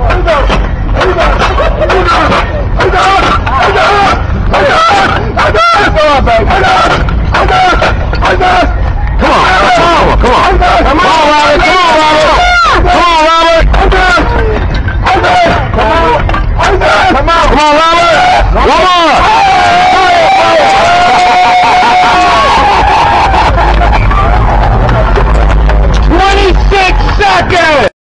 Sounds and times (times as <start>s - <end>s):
Speech: 26.1s - 27.9s.